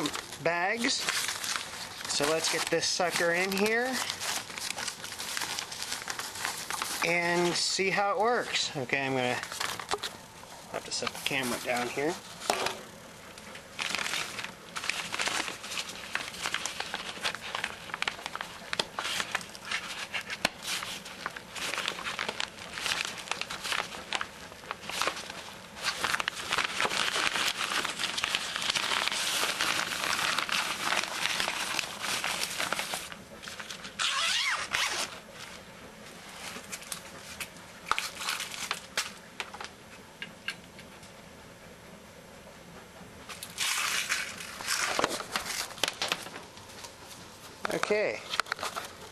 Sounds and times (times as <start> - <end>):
Speech: 0.0 - 1.1, 2.1 - 4.1, 7.0 - 9.5, 10.7 - 12.2, 47.6 - 48.3
Crumpling, crinkling: 0.0 - 41.0, 43.3 - 49.1
Inside, small room: 0.0 - 49.1.